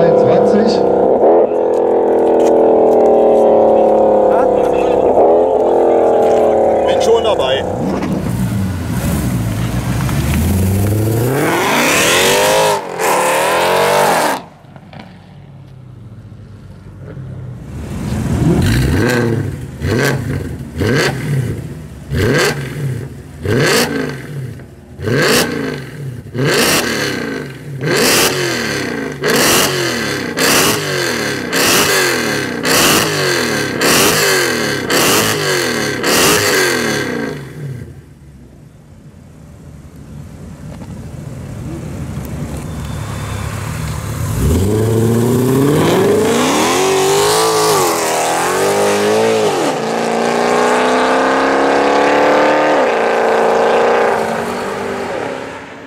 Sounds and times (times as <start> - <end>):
Outside, rural or natural: 0.0 - 55.8
Race car, auto racing: 0.0 - 55.8.